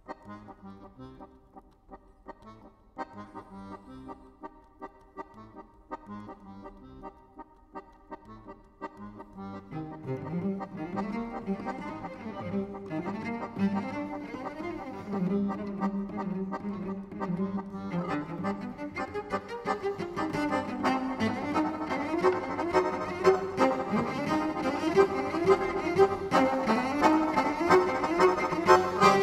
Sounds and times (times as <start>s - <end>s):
Music: 0.0s - 29.2s.